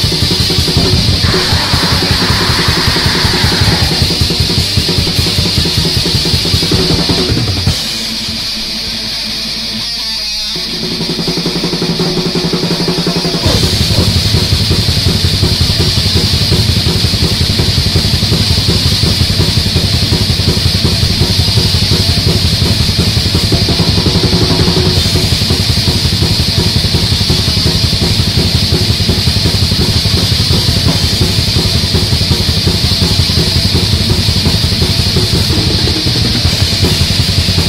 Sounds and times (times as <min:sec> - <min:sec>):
Music: 0:00.0 - 0:37.6.